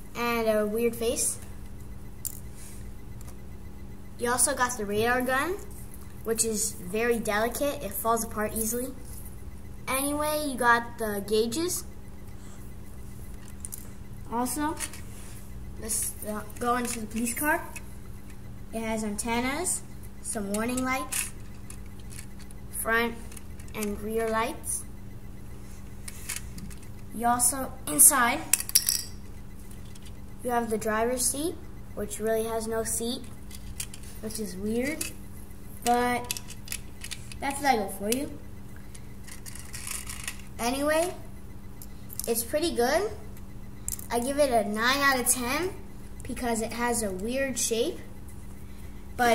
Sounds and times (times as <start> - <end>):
Speech: 0.2 - 1.4, 4.2 - 5.7, 6.3 - 9.0, 9.9 - 11.9, 14.3 - 14.8, 15.8 - 17.8, 18.8 - 21.1, 22.8 - 24.8, 27.2 - 28.5, 30.4 - 33.2, 34.2 - 35.1, 35.9 - 36.3, 37.4 - 38.4, 40.6 - 41.3, 42.3 - 43.2, 44.1 - 48.1.